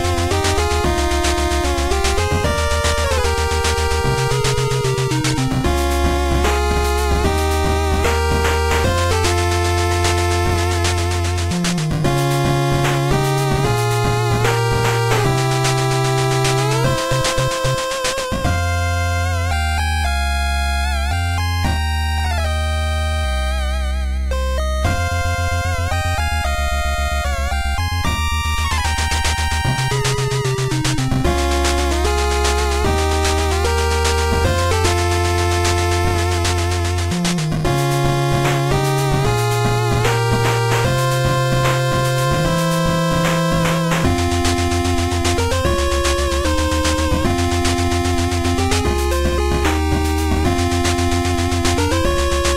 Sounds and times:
Music: 0.0 - 52.5.

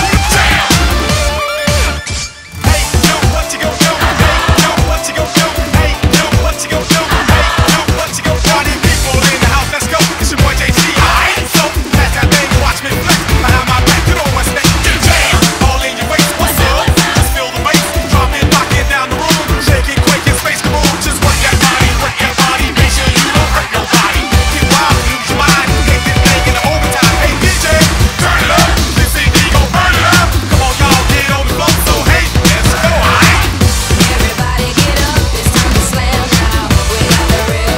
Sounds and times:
Music: 0.0 - 37.7.

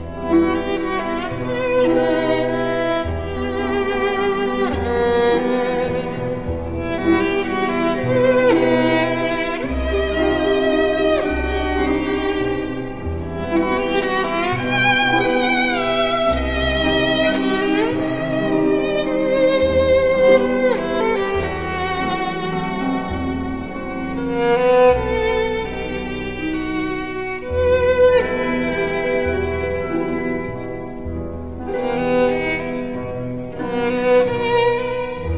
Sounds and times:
Bowed string instrument: 0.0 - 35.3.

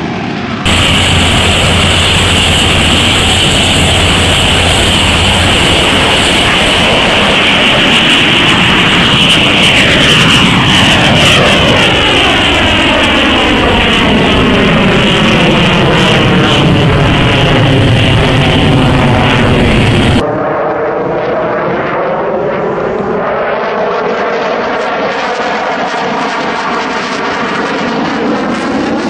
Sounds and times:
Fixed-wing aircraft, airplane: 0.0 - 29.1.

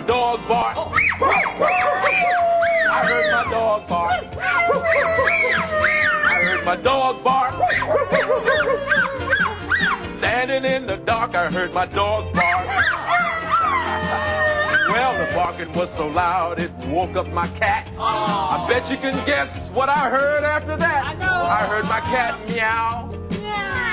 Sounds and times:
Music: 0.0 - 23.9
Bow-wow: 1.1 - 3.3, 7.6 - 10.0.

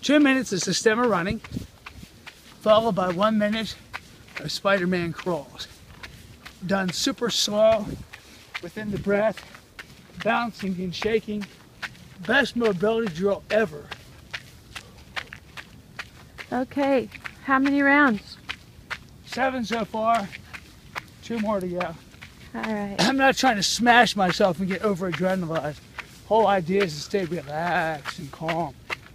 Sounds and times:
Run: 0.0 - 29.1
Speech: 2.6 - 3.8, 4.4 - 5.7, 6.6 - 7.9, 8.6 - 9.4, 10.2 - 11.5, 12.2 - 13.9, 19.3 - 20.4, 21.2 - 22.0, 22.6 - 28.7.

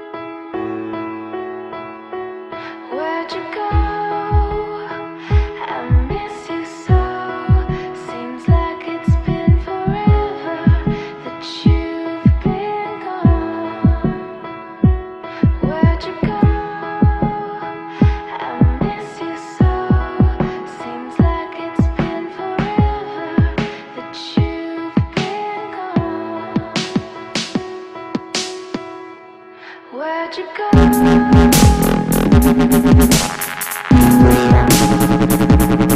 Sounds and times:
Music: 0.0 - 35.9.

